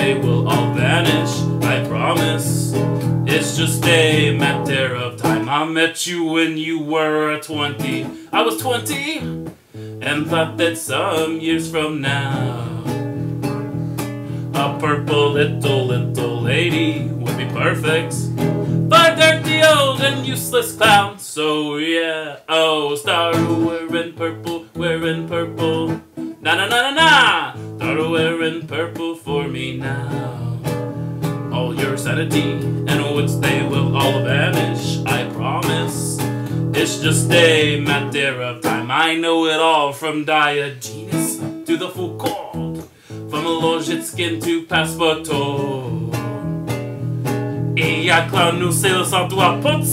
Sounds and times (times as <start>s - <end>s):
Singing: 0.0s - 2.7s, 3.3s - 9.3s, 31.5s - 36.2s, 36.8s - 46.2s
Acoustic guitar: 0.0s - 49.9s.